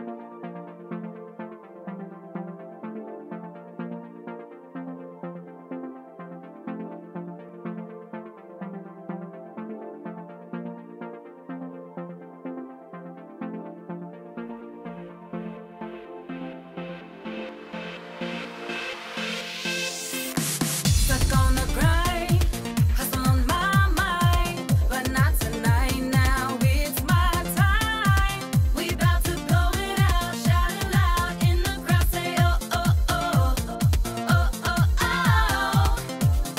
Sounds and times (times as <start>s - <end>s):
Rhythm and blues: 13.2s - 36.5s.